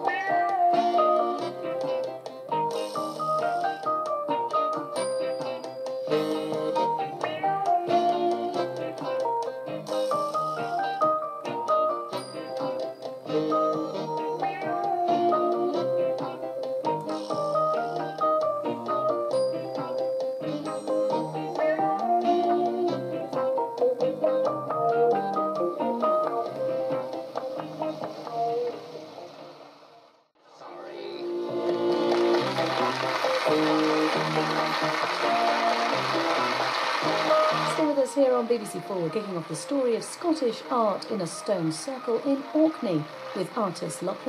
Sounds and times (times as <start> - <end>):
Theme music: 30.7 - 44.2.